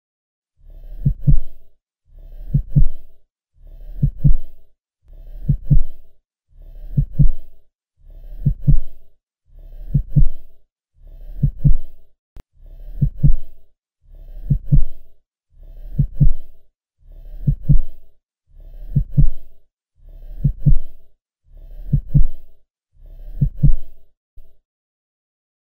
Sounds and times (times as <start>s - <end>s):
Heart sounds, heartbeat: 1.0s - 1.6s, 2.5s - 3.0s, 4.0s - 4.6s, 5.3s - 6.1s, 6.9s - 7.6s, 8.4s - 9.0s, 9.9s - 10.5s, 11.4s - 11.9s, 12.9s - 13.5s, 14.4s - 15.0s, 16.0s - 16.5s, 17.4s - 18.0s, 18.9s - 19.5s, 20.4s - 21.0s, 21.8s - 22.5s, 23.3s - 24.6s.